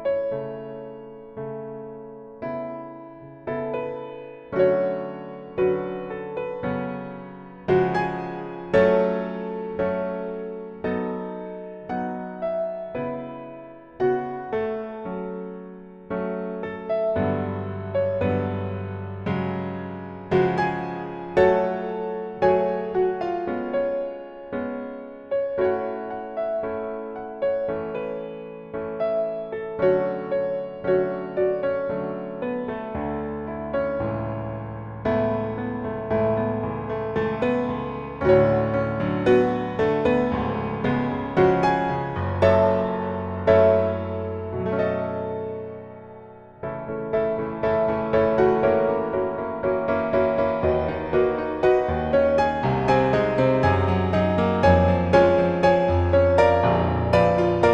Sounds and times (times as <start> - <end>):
Music: 0.0 - 57.7.